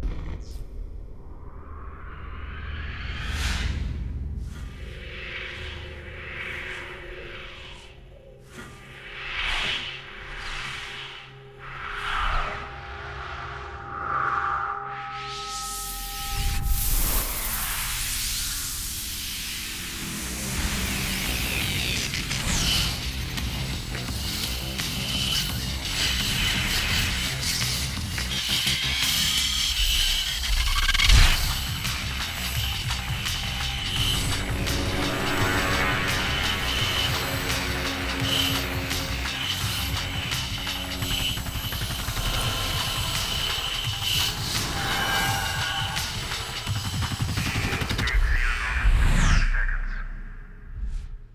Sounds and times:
Sound effect: 0:00.0 - 0:51.3
Music: 0:15.4 - 0:49.5.

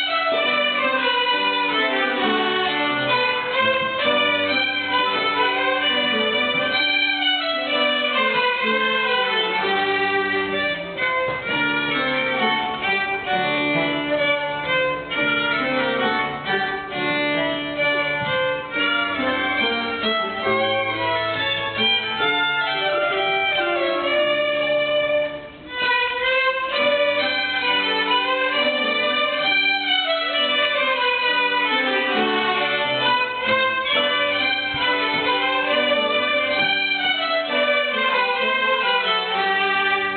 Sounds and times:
Violin, fiddle: 0:00.0 - 0:40.1.

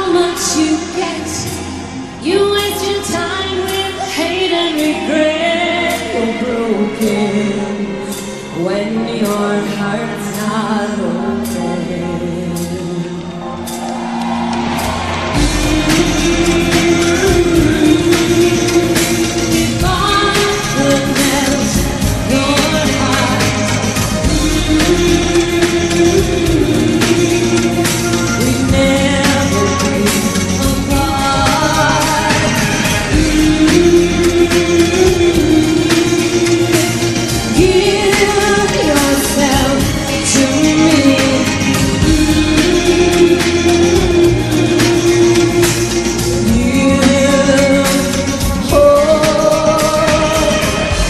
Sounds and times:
Music: 0:00.0 - 0:51.1.

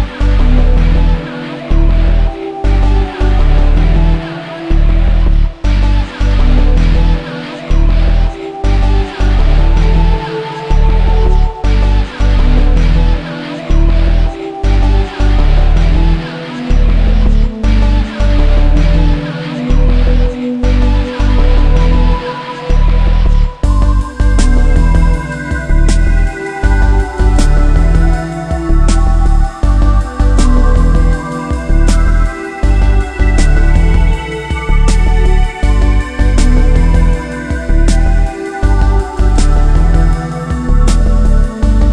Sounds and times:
Background music: 0:00.0 - 0:41.9.

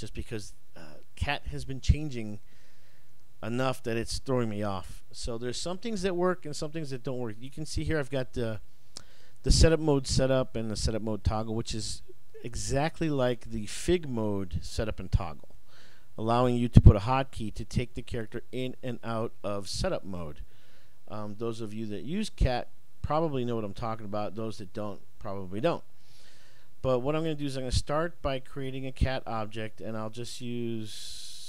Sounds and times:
Speech: 0:00.0 - 0:02.4, 0:03.4 - 0:08.6, 0:09.4 - 0:15.5, 0:16.2 - 0:20.4, 0:21.1 - 0:25.9, 0:26.8 - 0:31.4.

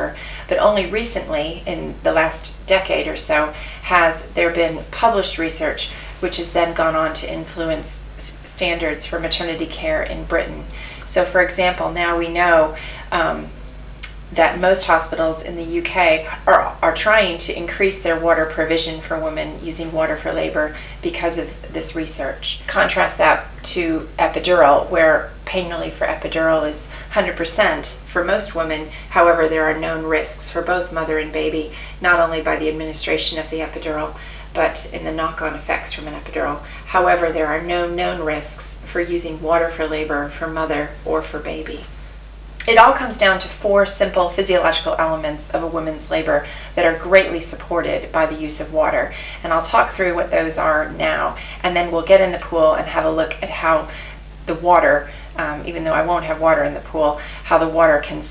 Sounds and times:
Speech: 0:00.0 - 0:41.9, 0:42.6 - 0:58.3.

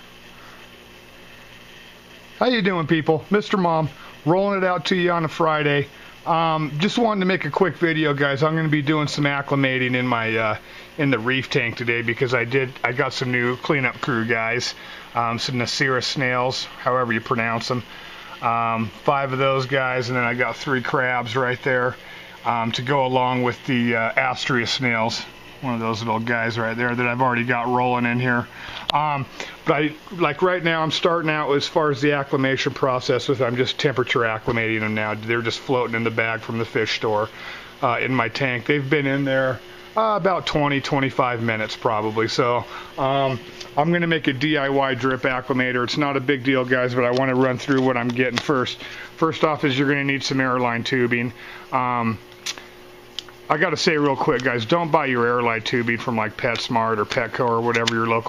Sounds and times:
Speech: 0:02.4 - 0:52.3, 0:53.5 - 0:58.2.

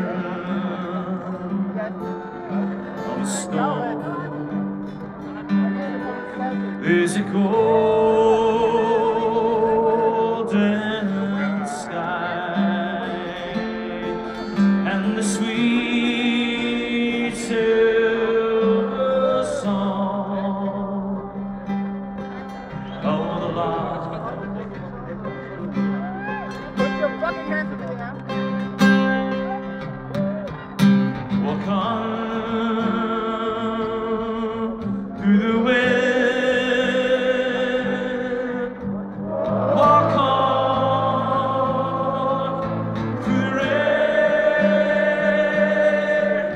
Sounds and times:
Music: 0:00.0 - 0:46.5
Speech: 0:01.5 - 0:07.4, 0:23.0 - 0:28.3.

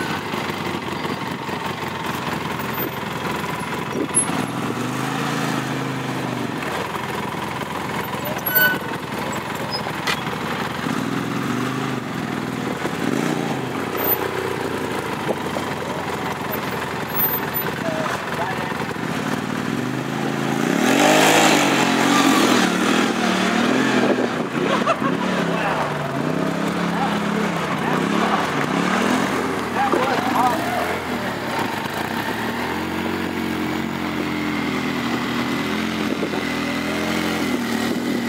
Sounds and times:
Speech: 0:17.8 - 0:18.9, 0:25.5 - 0:25.9, 0:26.8 - 0:28.6, 0:29.7 - 0:31.6.

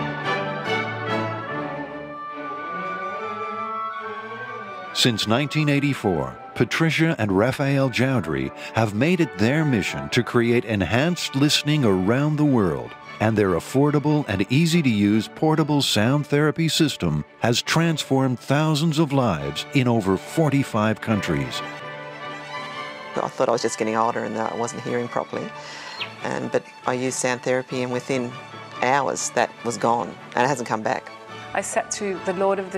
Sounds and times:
Music: 0:00.0 - 0:32.7
Speech: 0:05.0 - 0:21.7, 0:23.2 - 0:32.7.

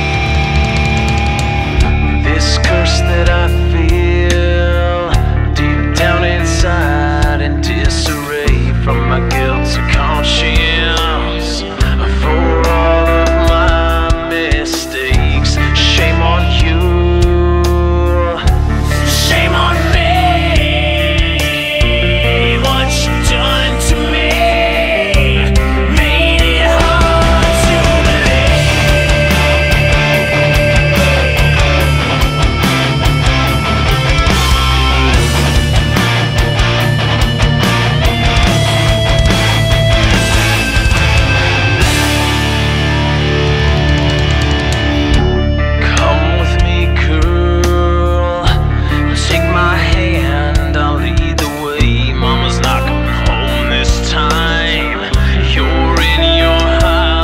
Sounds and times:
Music: 0:00.0 - 0:57.2.

